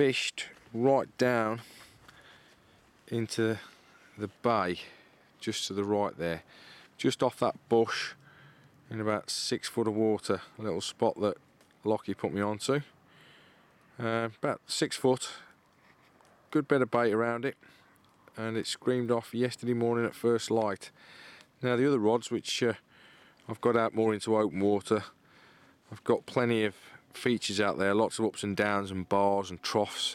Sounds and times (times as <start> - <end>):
Speech: 0.0 - 1.7, 3.1 - 6.4, 7.0 - 8.2, 8.9 - 12.9, 14.0 - 15.5, 16.5 - 17.6, 18.3 - 20.9, 21.6 - 22.8, 23.5 - 25.2, 25.9 - 30.1.